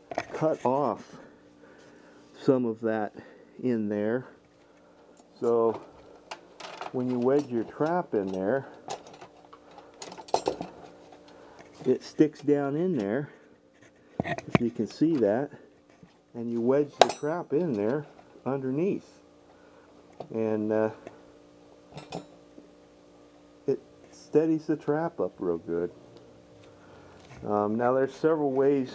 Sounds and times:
Speech: 0:00.3 - 0:01.2, 0:02.4 - 0:04.4, 0:05.4 - 0:05.8, 0:06.9 - 0:08.7, 0:11.8 - 0:13.3, 0:14.6 - 0:15.6, 0:16.4 - 0:19.2, 0:20.3 - 0:21.0, 0:23.7 - 0:25.9, 0:27.4 - 0:28.9.

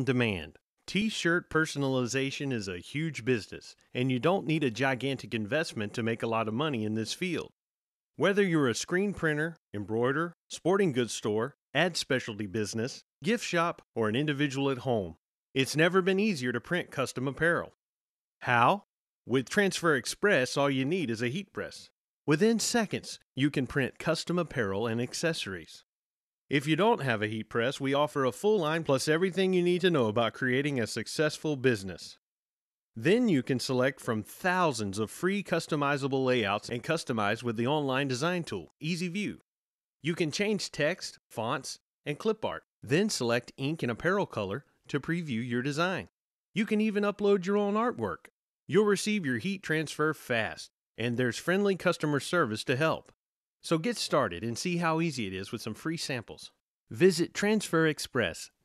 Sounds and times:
Speech: 0:00.0 - 0:07.6, 0:08.2 - 0:17.8, 0:18.4 - 0:25.8, 0:26.5 - 0:32.2, 0:33.0 - 0:39.4, 0:40.0 - 0:58.6.

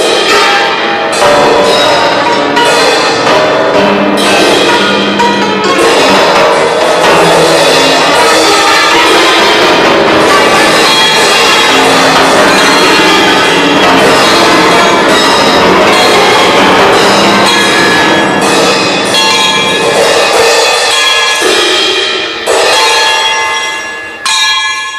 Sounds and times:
Inside, large room or hall: 0:00.0 - 0:24.9
Musical instrument: 0:00.0 - 0:24.9.

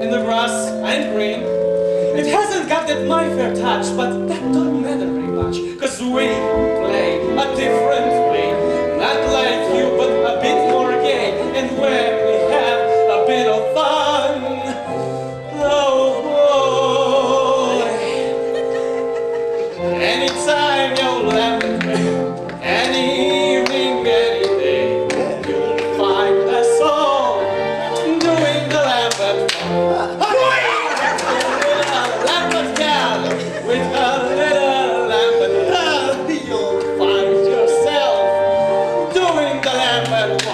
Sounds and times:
Music: 0:00.0 - 0:40.5.

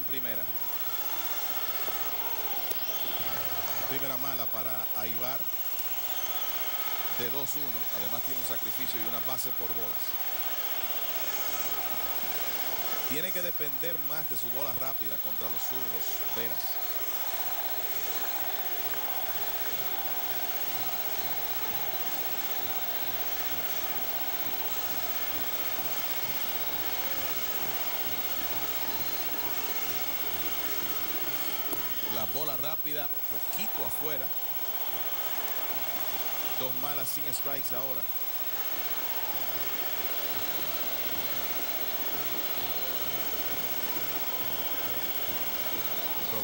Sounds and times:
Speech: 0:00.0 - 0:00.5, 0:03.8 - 0:05.5, 0:07.2 - 0:10.1, 0:13.1 - 0:16.8, 0:32.0 - 0:34.4, 0:36.6 - 0:38.1.

